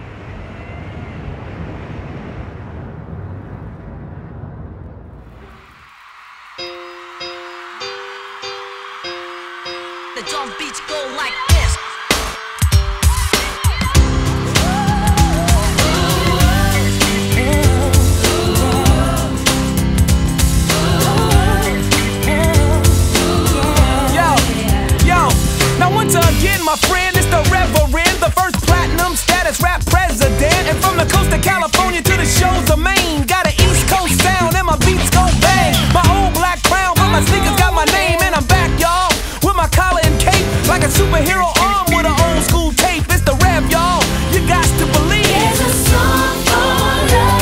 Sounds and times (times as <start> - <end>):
Music: 5.4 - 47.4.